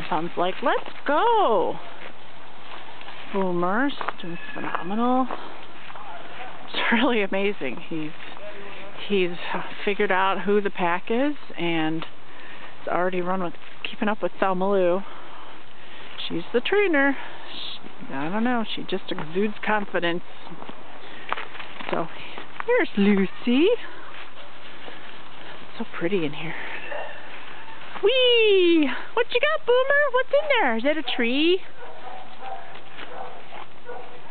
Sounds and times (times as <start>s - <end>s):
Speech: 16.2s - 20.2s, 28.0s - 31.7s.